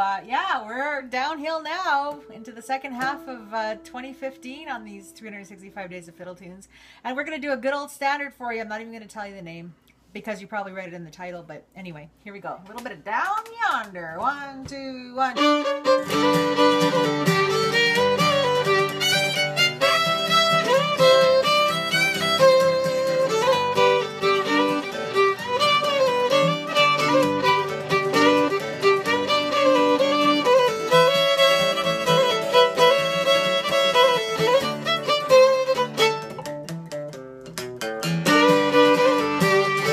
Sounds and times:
Violin, fiddle: 15.3 - 36.5, 38.2 - 39.9.

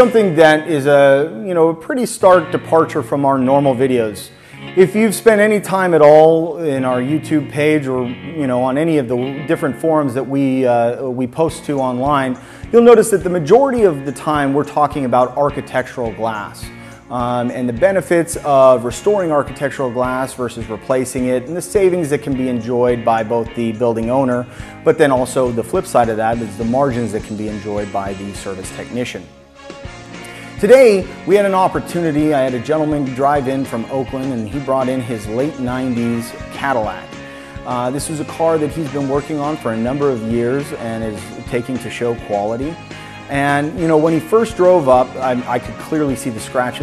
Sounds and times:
Speech: 0.0 - 29.3, 30.6 - 46.8
Music: 0.0 - 46.8.

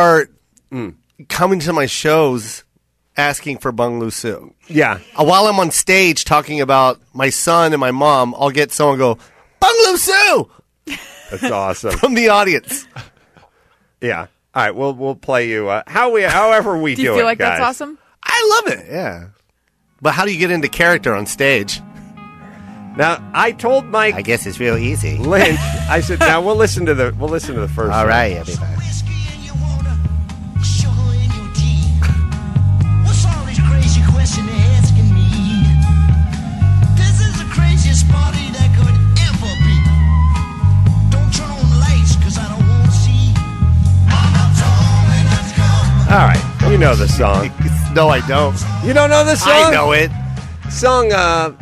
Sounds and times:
Speech: 3.2 - 10.5, 14.0 - 19.3, 20.0 - 21.8, 23.0 - 28.9, 46.1 - 50.1
Music: 20.1 - 51.6.

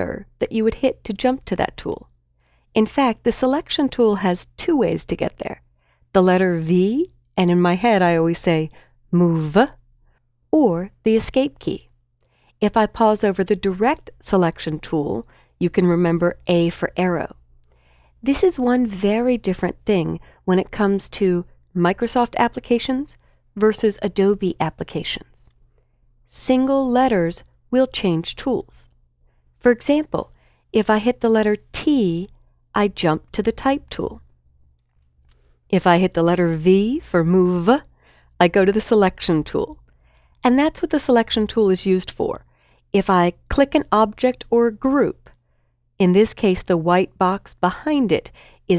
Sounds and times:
Speech: 0.0 - 2.1, 2.8 - 5.6, 6.2 - 9.8, 10.6 - 11.9, 12.6 - 17.4, 18.2 - 25.5, 26.3 - 28.9, 29.6 - 34.2, 35.7 - 39.8, 40.4 - 42.4, 43.0 - 45.3, 46.0 - 48.7.

